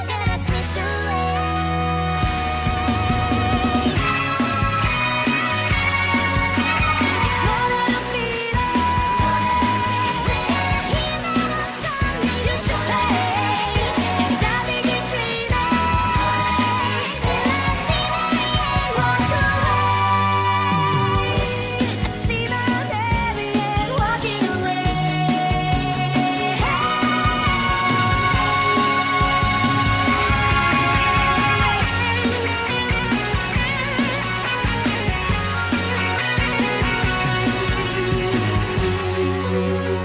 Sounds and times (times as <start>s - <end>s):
Music: 0.0s - 40.0s.